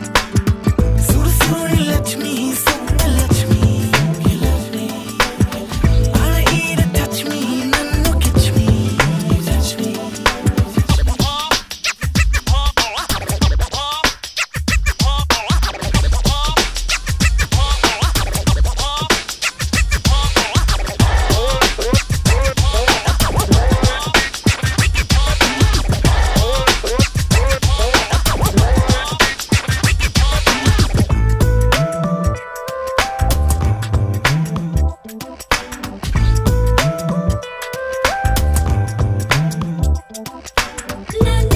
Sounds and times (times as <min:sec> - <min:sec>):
Scratching (performance technique): 0:00.0 - 0:41.5.